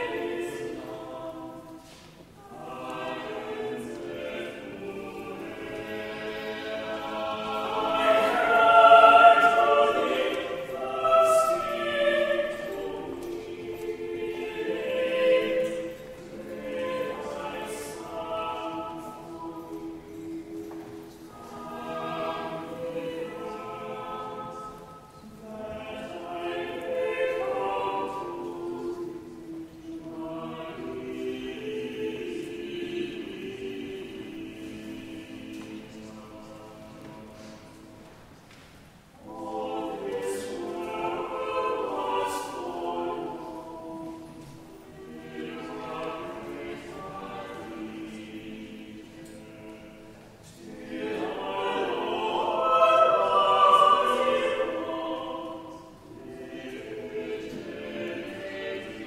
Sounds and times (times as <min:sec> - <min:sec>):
Choir: 0:00.0 - 0:59.0
Opera: 0:00.0 - 0:59.0.